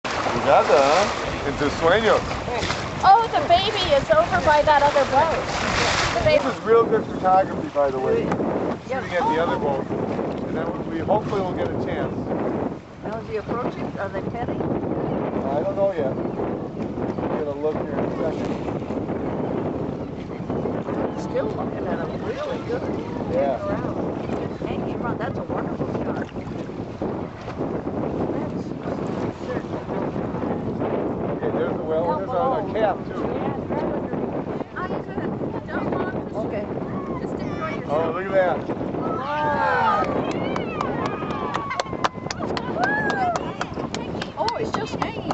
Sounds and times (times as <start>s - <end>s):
Boat, Water vehicle: 0.0s - 45.3s.